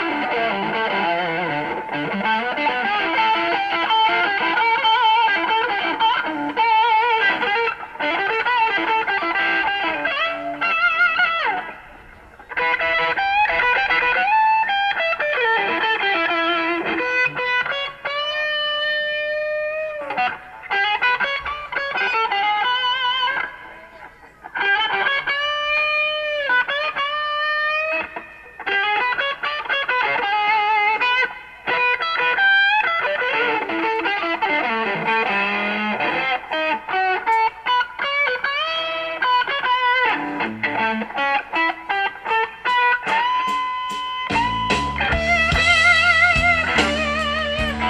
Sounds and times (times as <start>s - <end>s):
Blues: 0.0s - 47.9s.